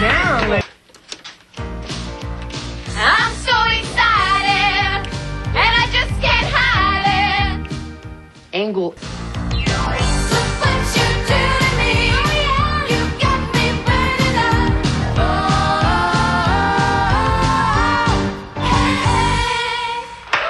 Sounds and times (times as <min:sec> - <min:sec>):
Music: 0:00.0 - 0:00.6, 0:01.5 - 0:20.4
Speech: 0:08.6 - 0:09.0.